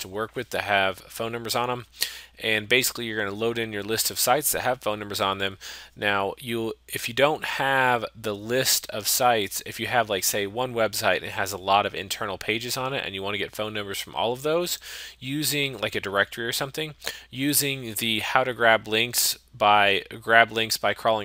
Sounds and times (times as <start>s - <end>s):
Speech: 0.0s - 21.2s.